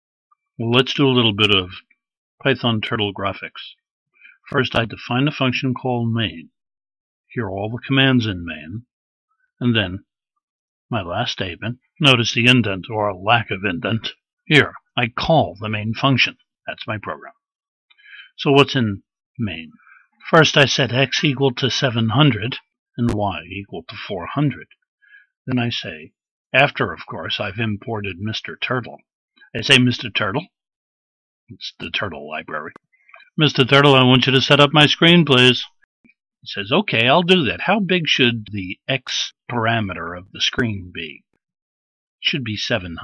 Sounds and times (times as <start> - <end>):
Speech: 0.6 - 6.6, 7.3 - 8.9, 9.6 - 10.1, 10.9 - 17.4, 18.2 - 24.7, 25.5 - 30.6, 31.5 - 35.8, 36.4 - 41.3, 42.2 - 43.0.